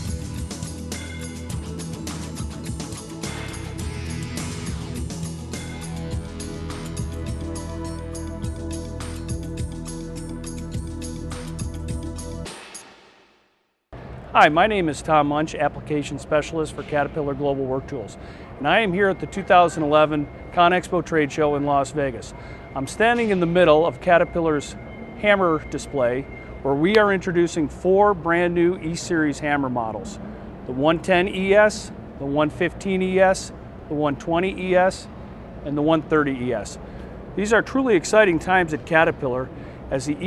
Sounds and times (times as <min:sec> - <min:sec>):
Speech: 0:14.4 - 0:36.8, 0:37.4 - 0:40.2.